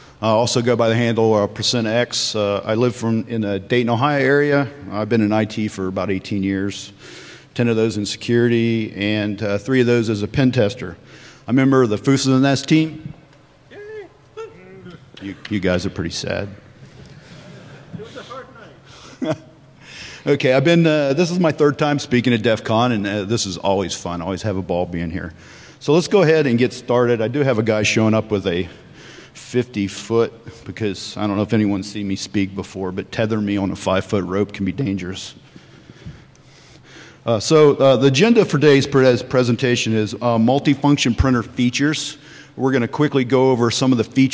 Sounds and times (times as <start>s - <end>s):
Speech: 0.2s - 7.0s, 7.6s - 16.6s, 18.0s - 18.8s, 20.3s - 28.7s, 29.4s - 35.4s, 37.3s - 44.3s.